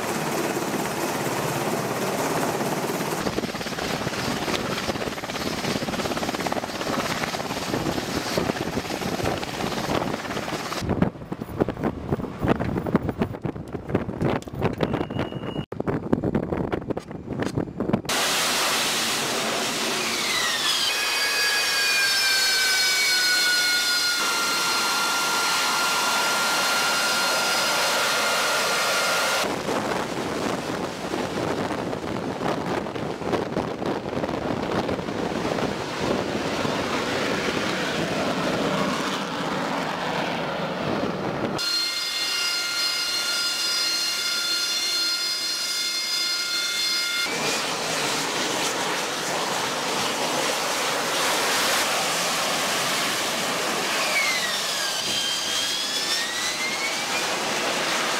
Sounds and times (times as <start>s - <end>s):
Aircraft: 0.0s - 42.3s, 46.2s - 58.1s.